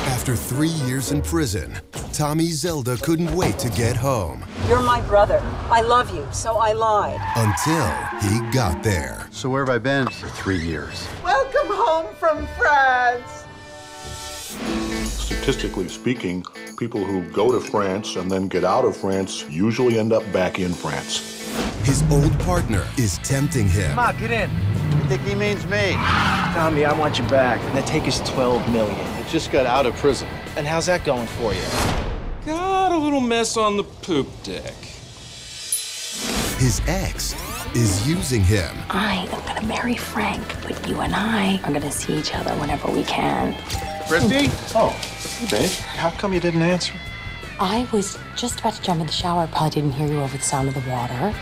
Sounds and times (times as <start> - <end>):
Music: 0.0 - 51.4.